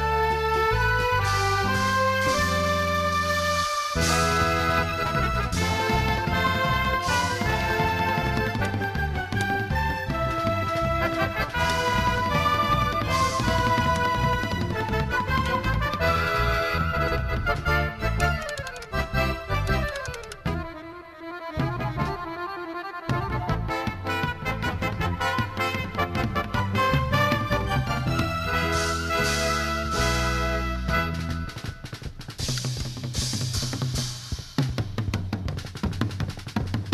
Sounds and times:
Drum kit: 0.0 - 20.6, 23.1 - 36.9
Drum: 3.9 - 18.6, 23.1 - 36.9.

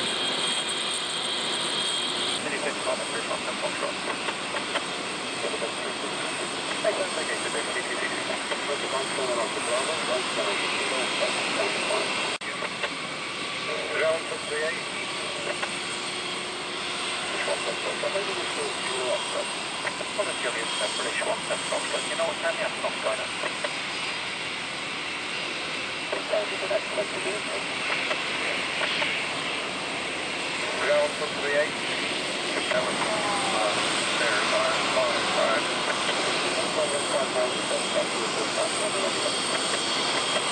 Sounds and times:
Fixed-wing aircraft, airplane: 0.0 - 40.5
Speech: 2.4 - 4.1, 5.4 - 12.7, 13.6 - 14.9, 17.3 - 23.3, 26.1 - 27.7, 30.7 - 31.8, 32.6 - 39.8.

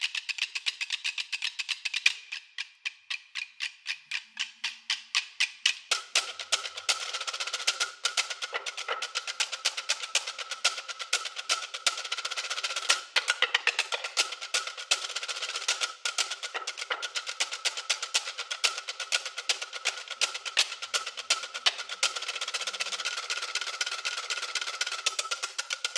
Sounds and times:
Music: 0.1 - 25.9.

